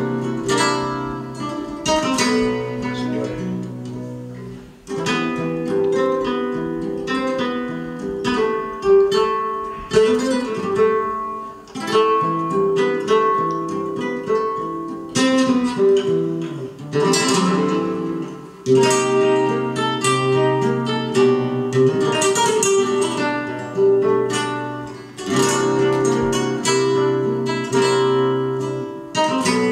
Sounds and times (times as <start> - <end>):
Flamenco: 0.0 - 29.7.